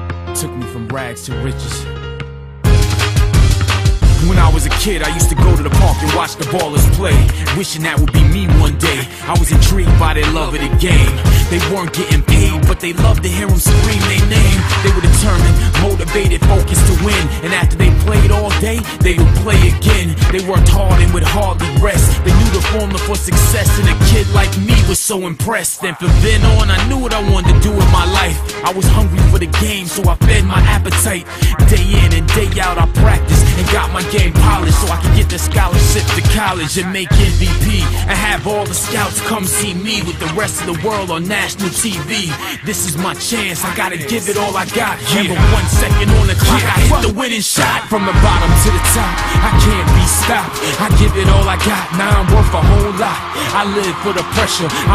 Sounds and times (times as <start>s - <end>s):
Music: 0.0s - 54.9s.